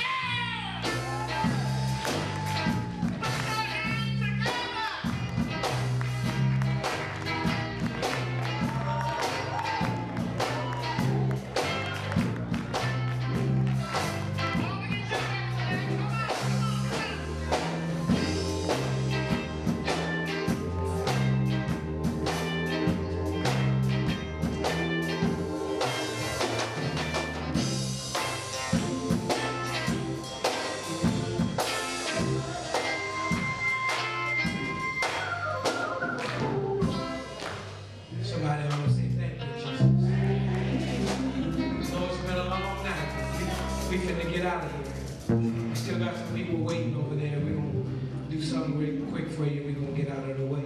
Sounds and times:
Gospel music: 0.0s - 50.6s.

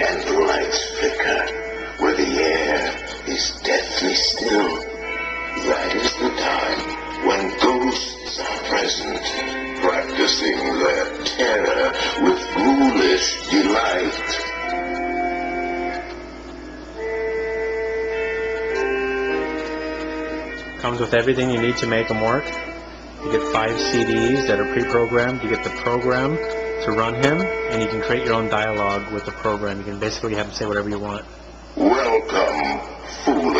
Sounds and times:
Speech: 0.0s - 4.9s, 5.6s - 14.4s, 20.8s - 22.5s, 23.2s - 33.5s
Music: 0.0s - 33.5s.

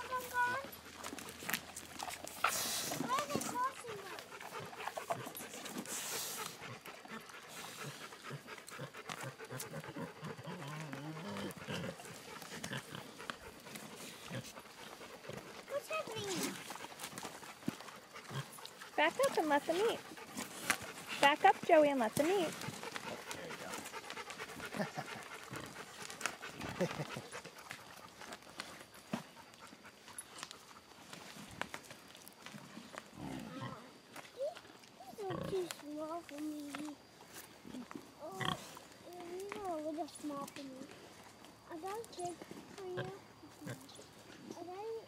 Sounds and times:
Domestic animals, pets: 0.0s - 31.6s, 42.2s - 45.0s
Pig: 0.0s - 45.0s.

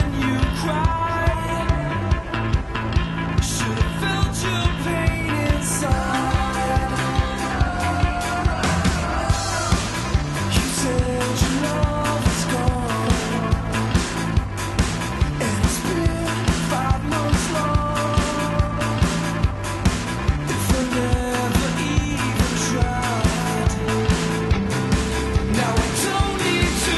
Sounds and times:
Blues: 0.0s - 26.9s.

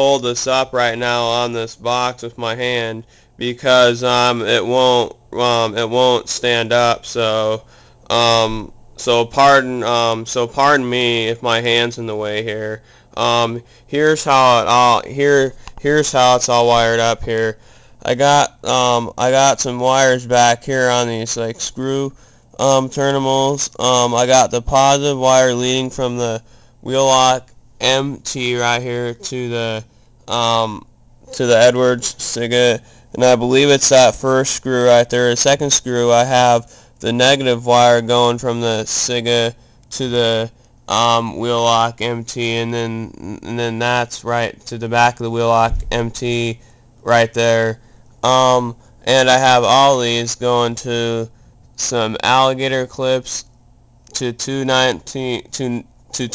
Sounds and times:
Speech: 0.0s - 53.5s, 54.1s - 56.3s.

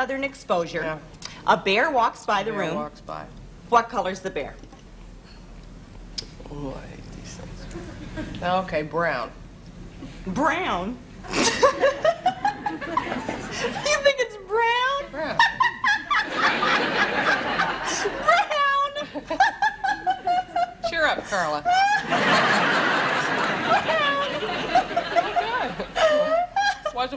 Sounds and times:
Laughter: 7.7s - 8.4s, 11.3s - 14.0s, 15.2s - 27.1s.

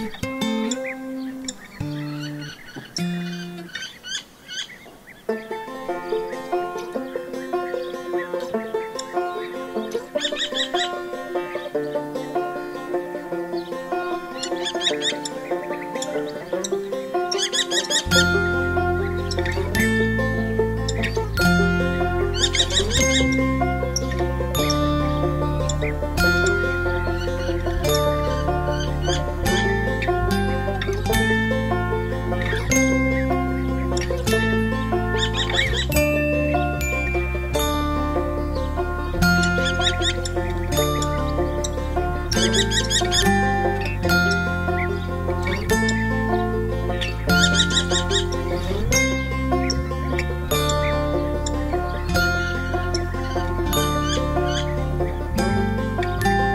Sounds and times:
Music: 0.0s - 3.9s, 5.3s - 56.5s.

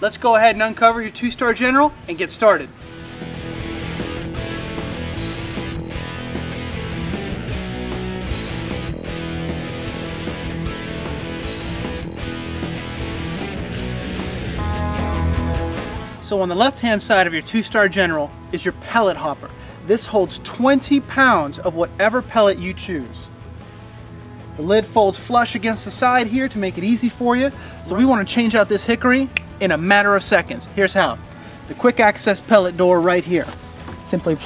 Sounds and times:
Music: 0.0s - 34.4s.

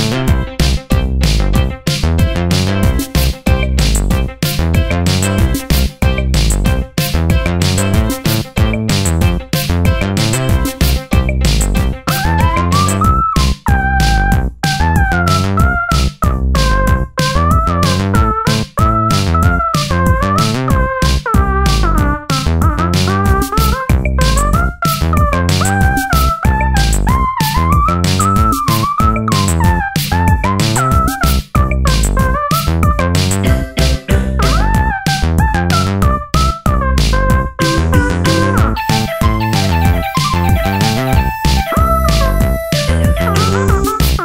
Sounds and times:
Music: 0.0s - 44.2s.

